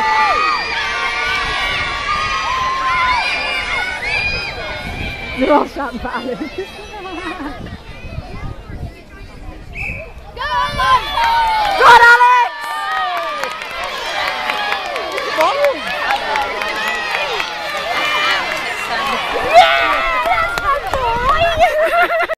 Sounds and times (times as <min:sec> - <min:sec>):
Outside, urban or manmade: 0:00.0 - 0:22.3.